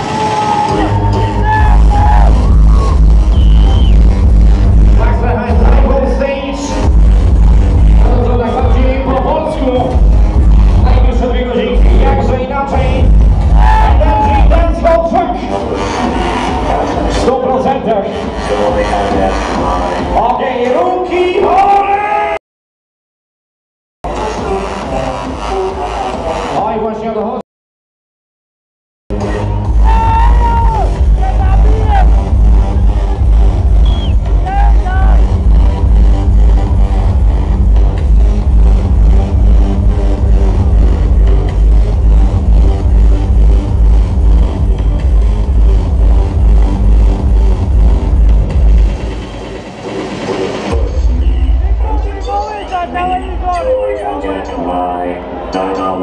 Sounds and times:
Music: 0:00.0 - 0:22.4, 0:24.0 - 0:27.4, 0:29.1 - 0:56.0
Speech: 0:05.0 - 0:06.8, 0:08.1 - 0:09.9, 0:10.8 - 0:13.0, 0:13.9 - 0:15.7, 0:17.2 - 0:19.4, 0:20.2 - 0:22.4, 0:26.6 - 0:27.4, 0:50.8 - 0:56.0.

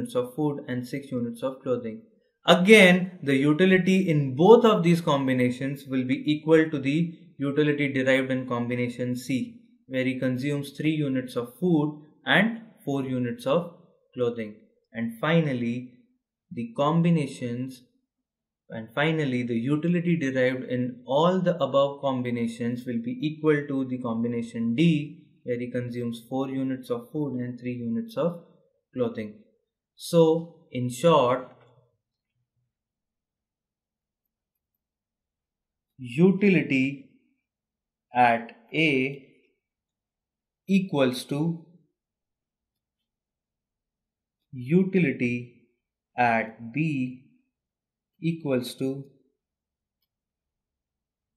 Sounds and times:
Speech: 0:00.0 - 0:15.9, 0:16.5 - 0:17.8, 0:18.7 - 0:28.4, 0:29.0 - 0:29.4, 0:30.0 - 0:31.5, 0:36.0 - 0:37.0, 0:38.1 - 0:39.2, 0:40.7 - 0:41.6, 0:44.6 - 0:45.5, 0:46.2 - 0:47.2, 0:48.2 - 0:49.1.

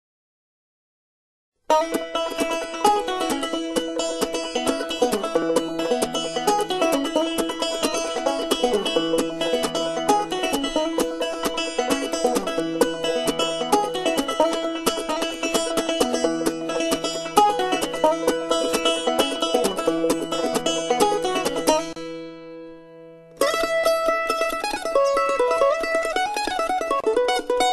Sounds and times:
Banjo: 0:01.7 - 0:27.7.

